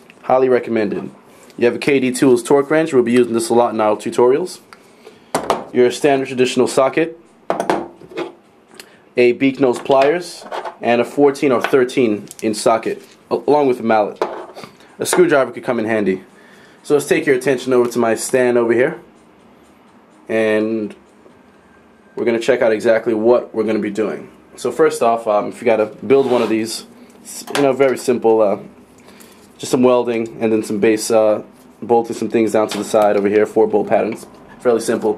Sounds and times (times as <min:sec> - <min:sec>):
Speech: 0:00.2 - 0:04.7, 0:05.8 - 0:07.2, 0:09.2 - 0:14.2, 0:15.0 - 0:19.1, 0:20.3 - 0:21.0, 0:22.2 - 0:28.7, 0:29.6 - 0:35.1.